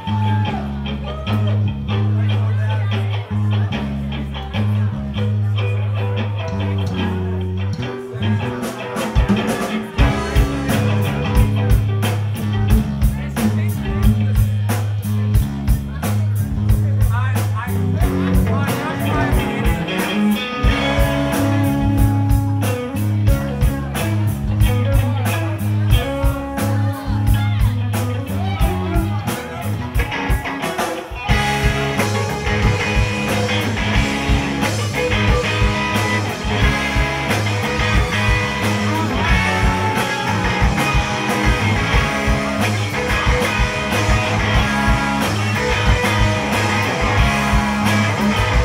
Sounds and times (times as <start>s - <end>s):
Independent music: 0.0s - 48.6s
Speech: 0.0s - 48.6s
Jazz: 3.0s - 48.6s.